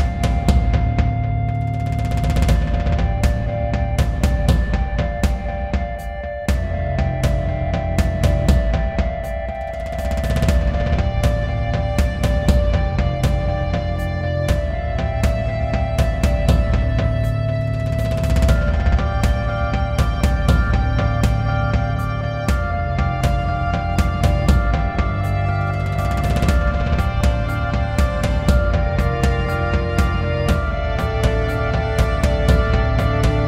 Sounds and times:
Music: 0.0s - 33.4s.

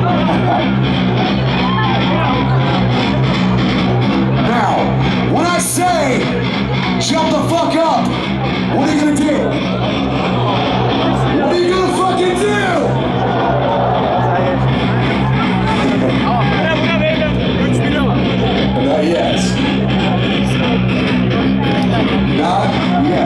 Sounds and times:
Music: 0.0s - 23.2s
Speech: 4.4s - 9.6s, 11.3s - 13.0s, 14.3s - 23.2s.

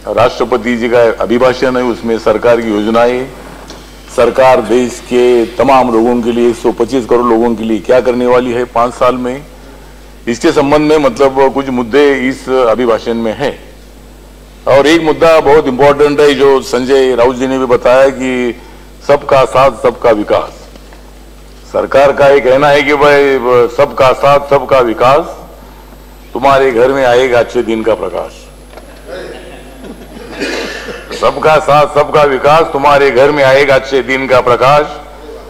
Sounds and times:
Male speech, man speaking: 0.0s - 3.4s, 4.1s - 9.5s, 10.3s - 13.7s, 14.7s - 20.7s, 21.7s - 25.5s, 26.4s - 28.5s, 31.1s - 35.4s
Narration, monologue: 0.0s - 35.4s.

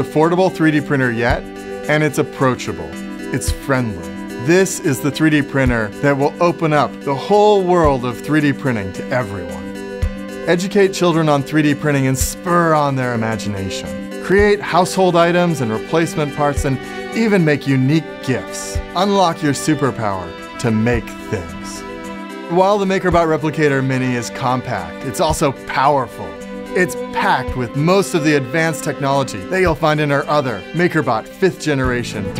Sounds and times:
Speech: 0.0s - 9.6s, 10.5s - 21.8s, 22.5s - 32.3s
Music: 0.0s - 32.3s.

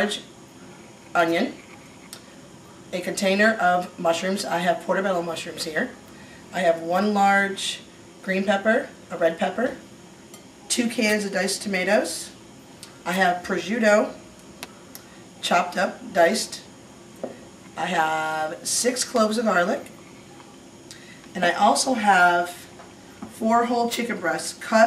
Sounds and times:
Speech: 0.0s - 0.3s, 1.2s - 1.6s, 2.9s - 9.8s, 10.7s - 12.4s, 13.0s - 14.2s, 15.4s - 16.7s, 17.8s - 20.5s, 21.4s - 22.8s, 23.4s - 24.8s.

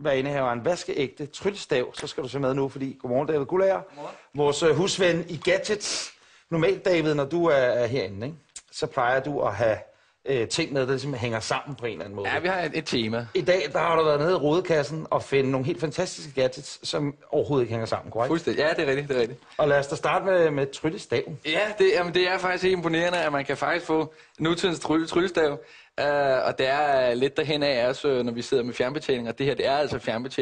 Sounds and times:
Speech: 0.0s - 30.4s.

